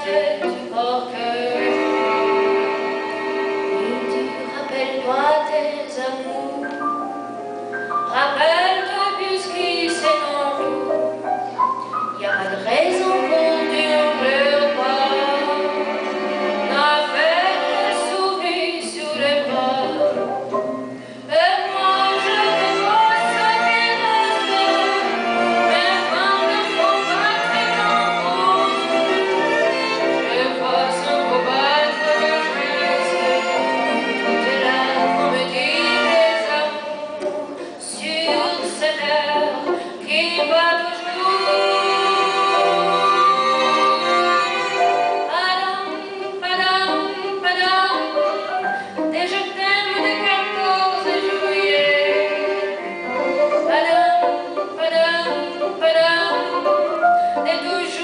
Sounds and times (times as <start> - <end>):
Female singing: 0.0 - 2.1, 3.8 - 6.8, 8.1 - 10.8, 12.2 - 15.8, 16.7 - 20.2, 21.3 - 48.5, 49.1 - 52.8, 53.7 - 56.7, 57.4 - 58.0
Bowed string instrument: 0.0 - 58.0.